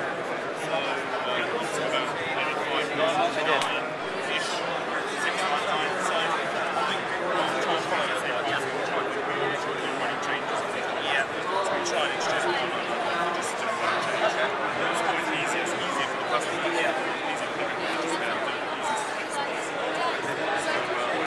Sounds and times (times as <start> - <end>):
Speech: 0.0 - 21.2.